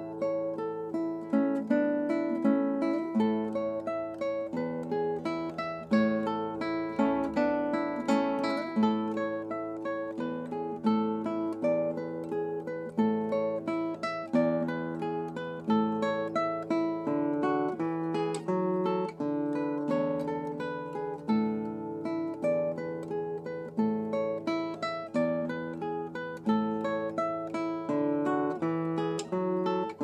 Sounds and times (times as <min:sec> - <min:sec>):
Guitar: 0:00.0 - 0:30.0.